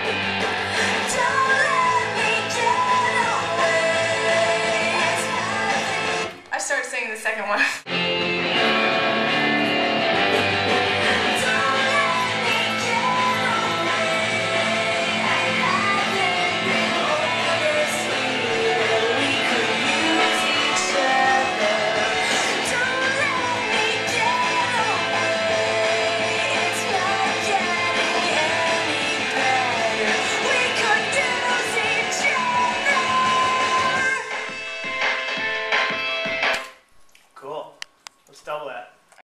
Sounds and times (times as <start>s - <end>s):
Music: 0.0s - 6.4s, 7.8s - 36.8s
Speech: 6.5s - 7.8s, 37.4s - 39.0s.